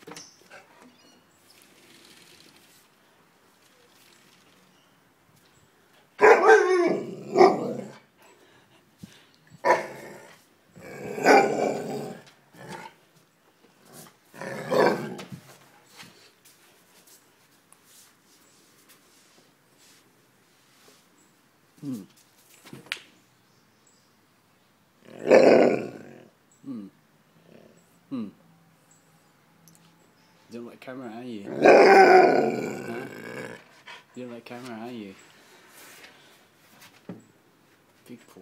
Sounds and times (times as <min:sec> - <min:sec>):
Speech: 0:30.5 - 0:31.6, 0:34.2 - 0:35.2, 0:38.0 - 0:38.4.